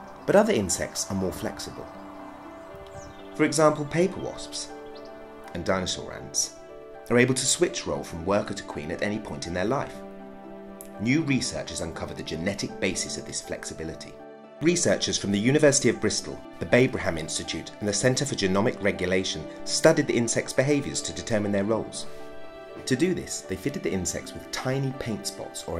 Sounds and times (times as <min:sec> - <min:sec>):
Speech: 0:00.3 - 0:01.9, 0:03.4 - 0:04.7, 0:05.5 - 0:06.5, 0:07.1 - 0:10.0, 0:11.0 - 0:22.1, 0:22.8 - 0:25.7.